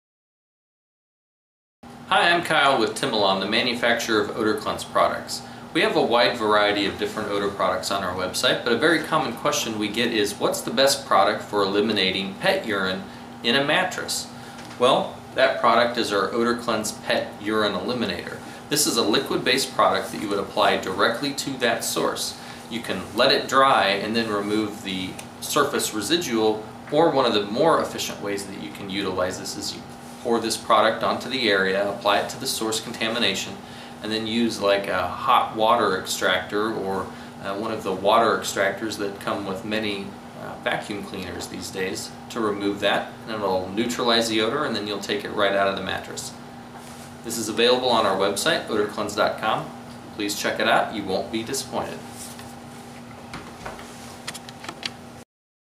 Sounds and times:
Speech: 2.1s - 46.4s, 47.2s - 52.1s.

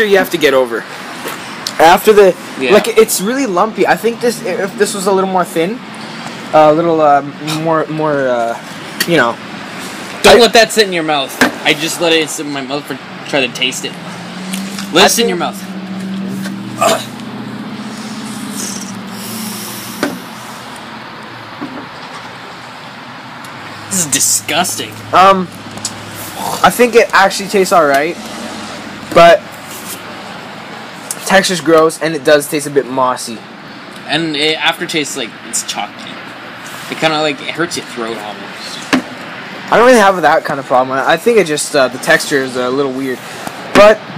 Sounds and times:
Speech: 0.0s - 0.9s, 1.8s - 5.8s, 6.5s - 9.4s, 10.2s - 14.0s, 14.9s - 15.6s, 23.9s - 25.5s, 26.4s - 28.2s, 29.1s - 29.4s, 31.2s - 33.4s, 34.0s - 36.2s, 36.9s - 38.8s, 39.7s - 43.2s, 43.8s - 44.0s
Outside, urban or manmade: 0.0s - 44.1s.

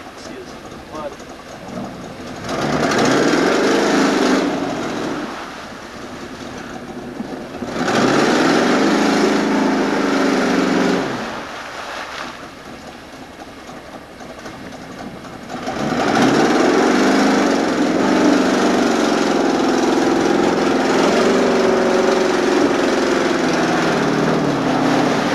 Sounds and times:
Car: 0.0s - 25.3s.

